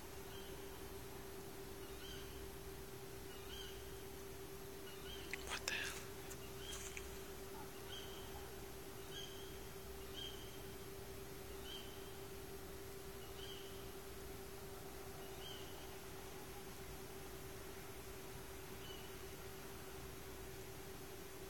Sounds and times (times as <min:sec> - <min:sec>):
Bird vocalization, bird call, bird song: 0:00.2 - 0:00.8, 0:01.8 - 0:02.5, 0:03.2 - 0:04.0, 0:04.8 - 0:10.8, 0:11.4 - 0:12.3, 0:13.1 - 0:14.0, 0:15.2 - 0:16.8, 0:18.7 - 0:19.3.